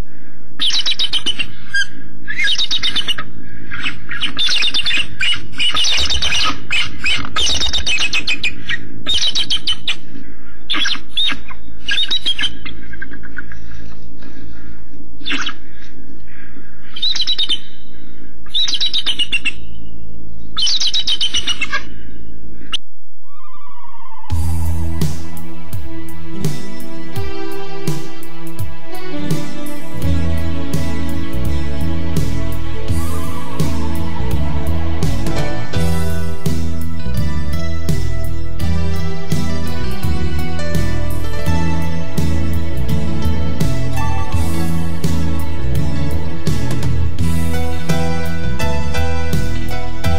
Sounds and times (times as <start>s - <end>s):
Bird: 0.6s - 24.4s.